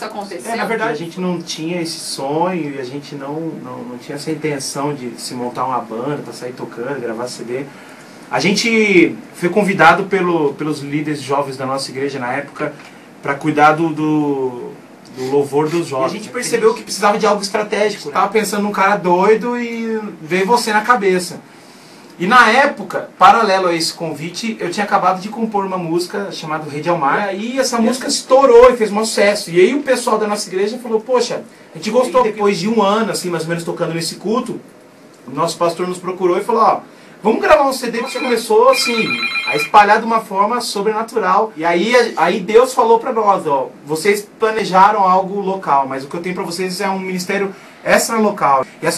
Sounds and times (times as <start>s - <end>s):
Speech: 0.0s - 7.7s, 8.3s - 21.5s, 22.2s - 34.7s, 35.3s - 48.9s.